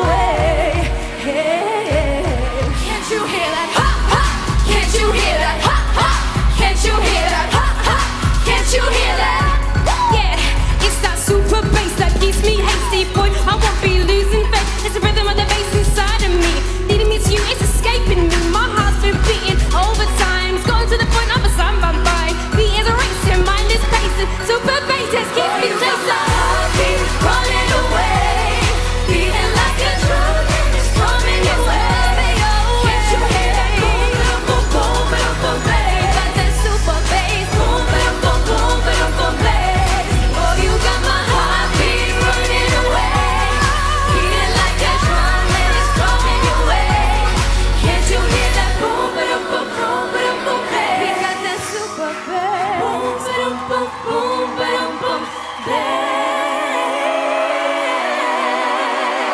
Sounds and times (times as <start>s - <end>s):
Pop music: 0.0s - 59.3s
Singing: 0.0s - 59.3s.